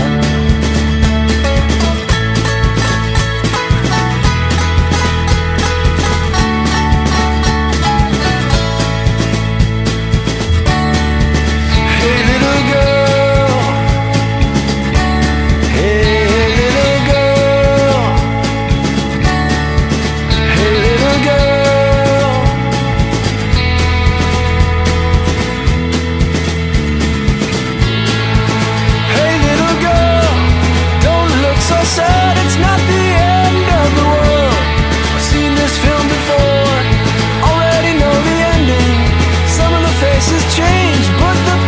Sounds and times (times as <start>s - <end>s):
Music: 0.0s - 41.6s.